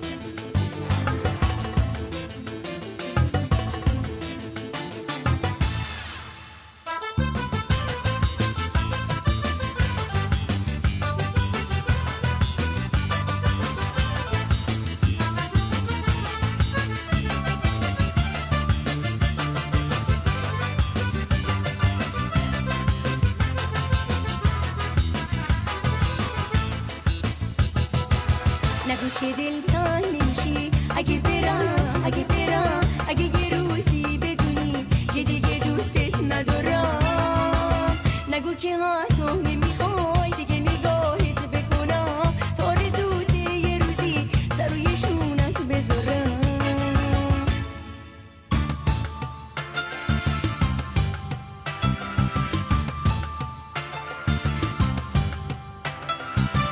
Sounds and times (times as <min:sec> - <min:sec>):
Soundtrack music: 0:00.0 - 0:38.5, 0:46.6 - 0:56.7
Independent music: 0:00.0 - 0:56.7.